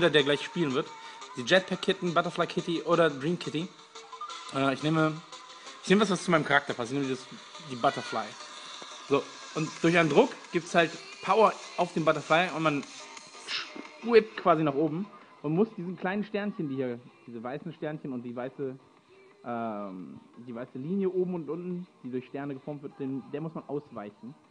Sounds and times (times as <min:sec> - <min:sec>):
Speech: 0:00.0 - 0:03.7, 0:04.5 - 0:05.2, 0:05.8 - 0:08.4, 0:09.1 - 0:12.8, 0:14.0 - 0:18.8, 0:19.5 - 0:24.4
Music: 0:00.0 - 0:24.5.